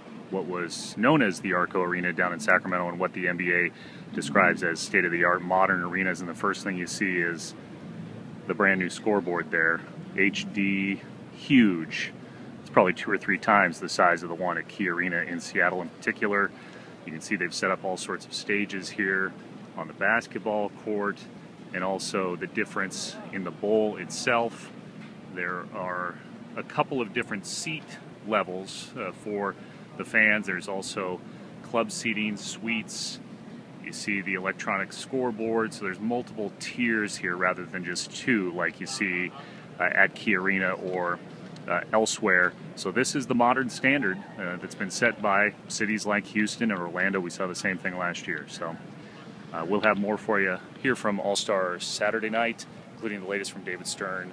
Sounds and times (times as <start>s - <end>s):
Speech: 0.3s - 7.6s, 8.5s - 24.7s, 25.4s - 33.2s, 33.8s - 48.8s, 49.5s - 54.3s.